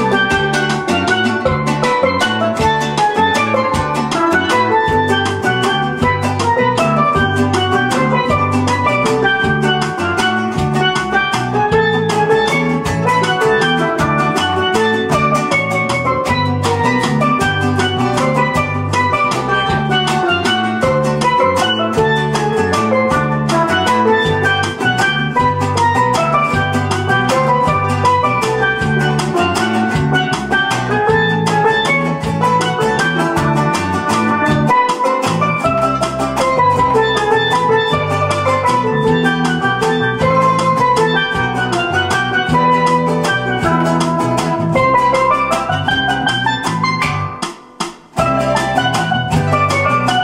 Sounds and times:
Steelpan: 0:00.0 - 0:50.2.

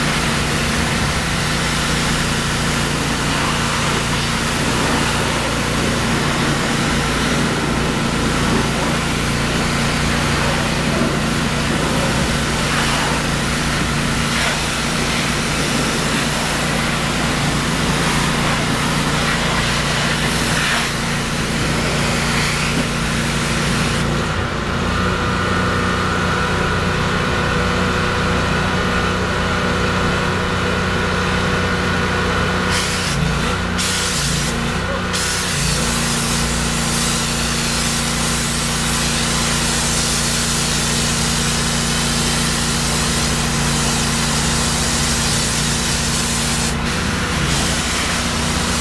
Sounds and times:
Vehicle: 0:00.0 - 0:48.8.

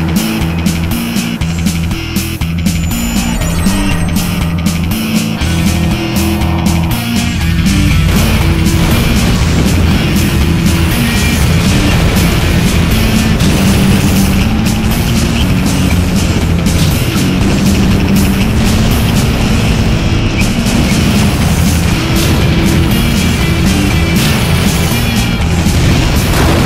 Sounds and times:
Music: 0:00.0 - 0:26.6.

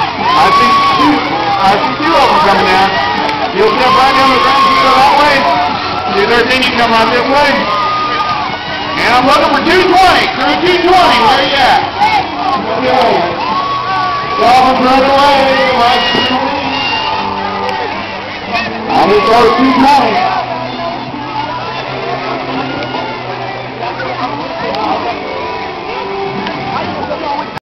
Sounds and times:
Music: 0:00.0 - 0:27.6.

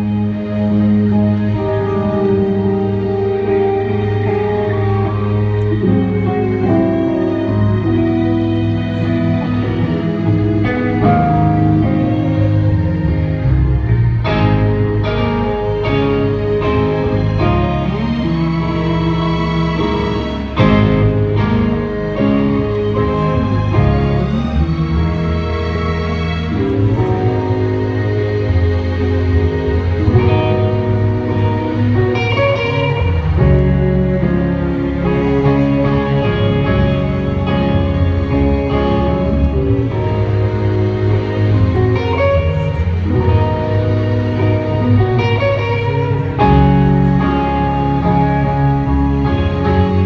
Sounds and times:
Music: 0:00.0 - 0:50.0.

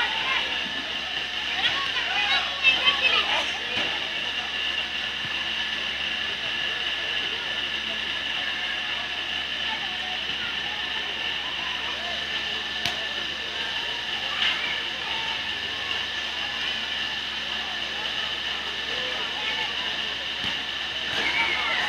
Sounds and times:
Speech: 0:00.0 - 0:21.8.

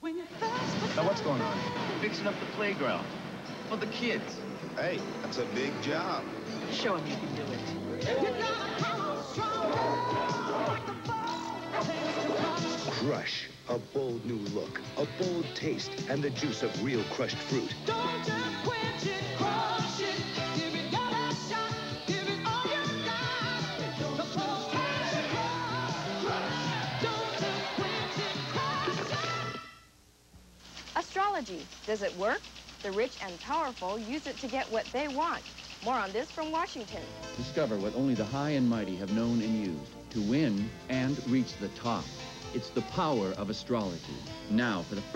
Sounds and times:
Music: 0:00.0 - 0:29.9, 0:35.9 - 0:45.1.

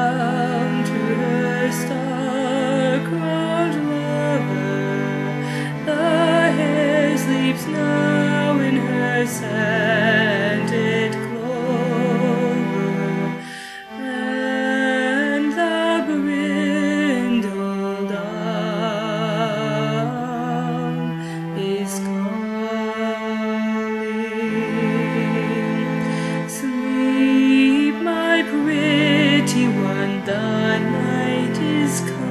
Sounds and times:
Lullaby: 0:00.0 - 0:32.3.

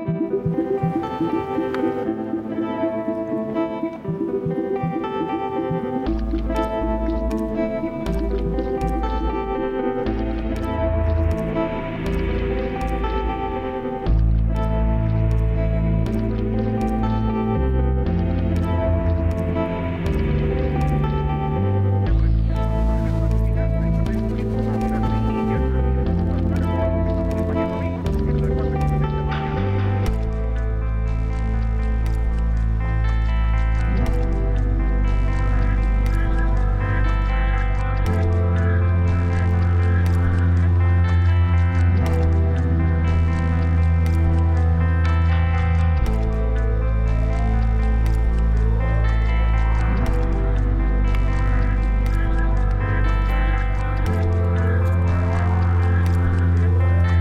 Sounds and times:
Music: 0:00.0 - 0:57.2.

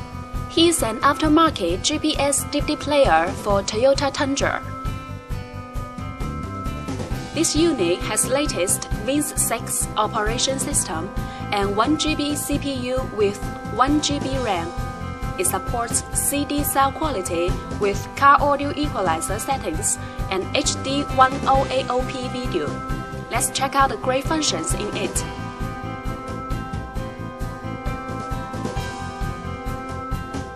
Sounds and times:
Music: 0:00.0 - 0:30.5
Speech: 0:00.5 - 0:04.7, 0:07.4 - 0:14.7, 0:15.4 - 0:25.3.

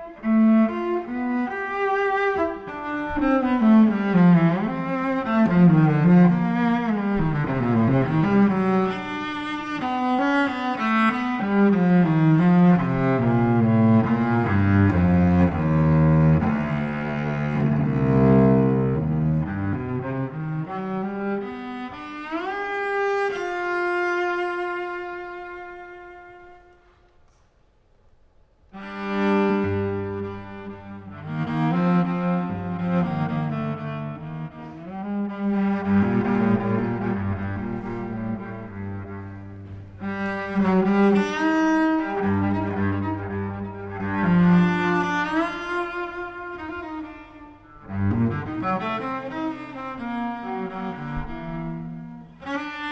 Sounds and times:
Cello: 0:00.0 - 0:27.6, 0:28.2 - 0:52.9.

